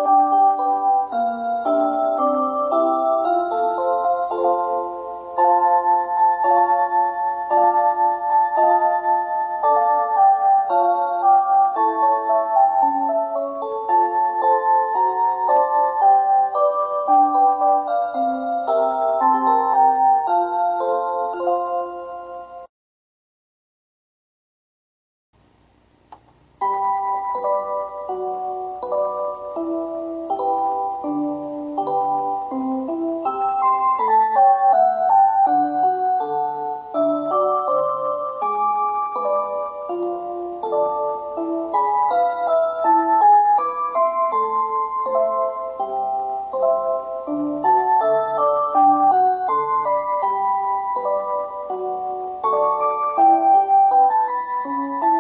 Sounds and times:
Music: 0.0 - 22.7, 26.1 - 55.2.

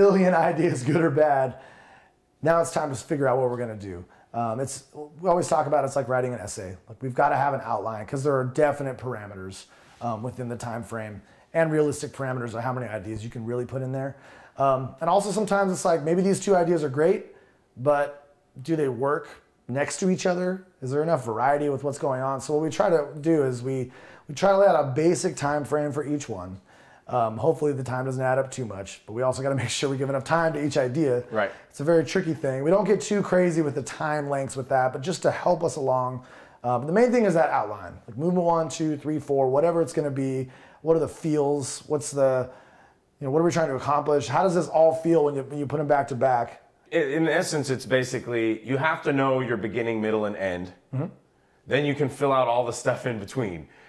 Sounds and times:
Speech: 0.0 - 1.6, 2.4 - 42.5, 43.2 - 53.7.

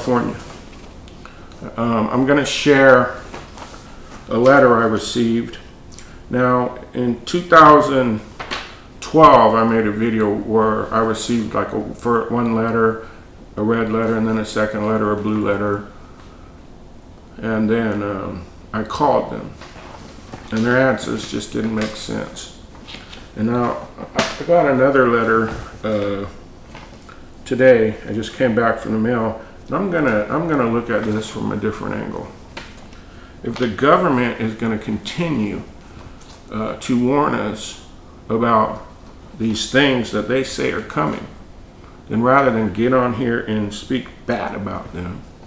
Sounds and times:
Speech: 0.0 - 0.5, 1.6 - 3.3, 4.3 - 5.7, 6.3 - 8.3, 9.0 - 16.0, 17.4 - 19.6, 20.5 - 22.6, 23.4 - 26.4, 27.4 - 32.4, 33.4 - 35.7, 36.5 - 41.4, 42.1 - 45.3.

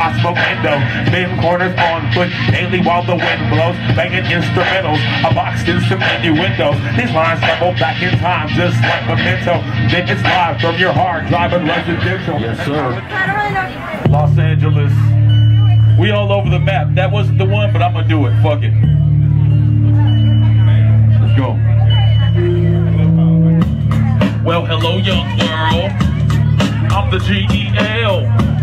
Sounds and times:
Music: 0.0 - 28.6
Speech: 11.6 - 15.1, 15.9 - 18.8, 20.6 - 22.4, 24.2 - 28.4.

